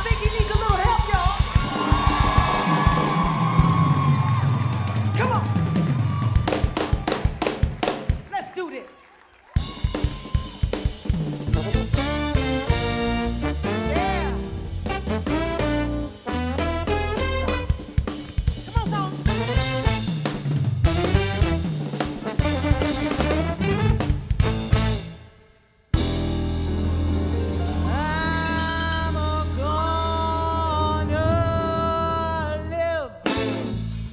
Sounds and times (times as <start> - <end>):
Music: 0.0 - 8.3, 9.3 - 34.1
Speech: 8.3 - 9.0, 18.7 - 19.3.